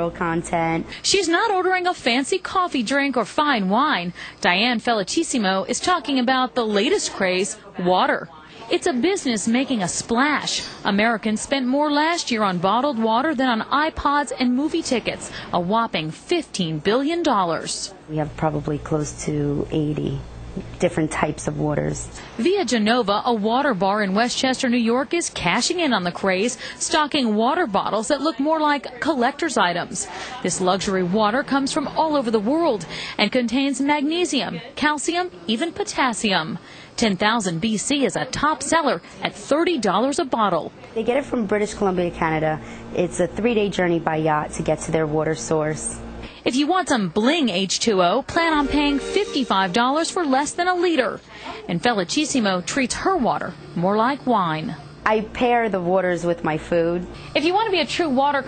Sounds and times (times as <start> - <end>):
Speech: 0.0 - 58.4.